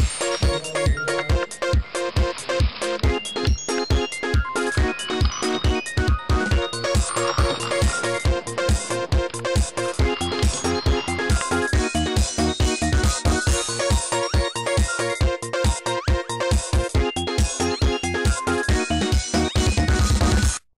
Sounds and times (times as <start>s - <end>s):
Music: 0.0s - 20.7s.